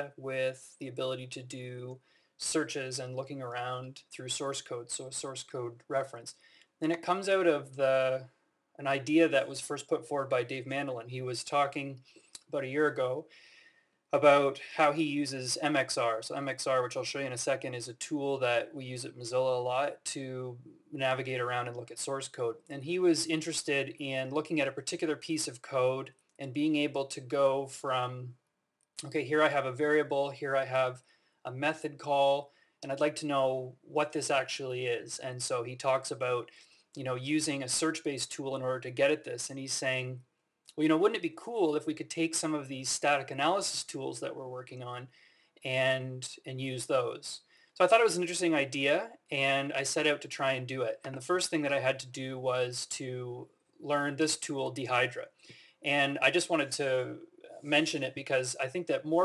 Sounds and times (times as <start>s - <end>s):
Speech: 0.0s - 13.3s, 14.2s - 28.4s, 29.0s - 59.2s.